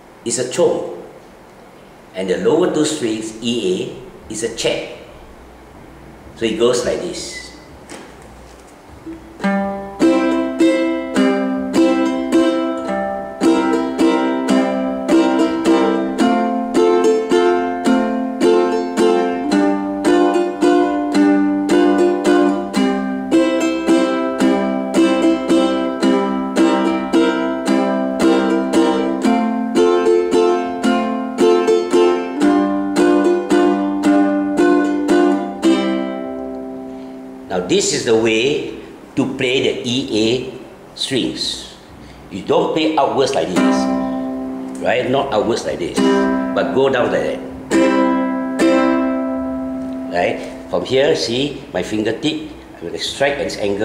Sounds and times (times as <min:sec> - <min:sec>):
Guitar: 0:06.8 - 0:39.4, 0:42.9 - 0:53.8
Ukulele: 0:07.9 - 0:37.5, 0:43.1 - 0:51.6.